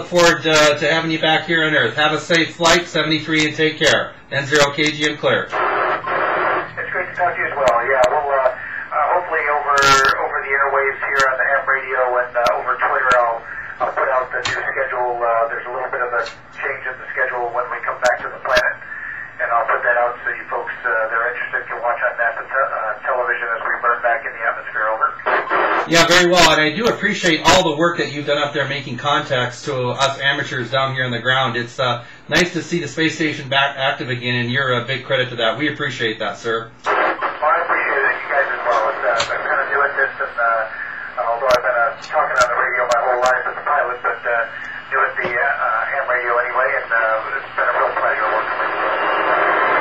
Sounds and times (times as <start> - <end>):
Speech: 0.0 - 5.6, 6.8 - 49.0
Radio: 0.0 - 49.8.